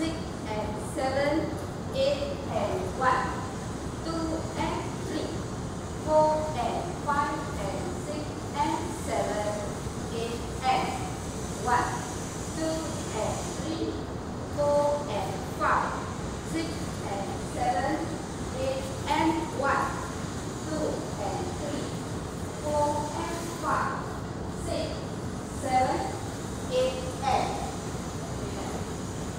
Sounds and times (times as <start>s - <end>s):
Speech: 0.0s - 5.4s, 6.0s - 20.0s, 20.7s - 22.0s, 22.6s - 28.9s.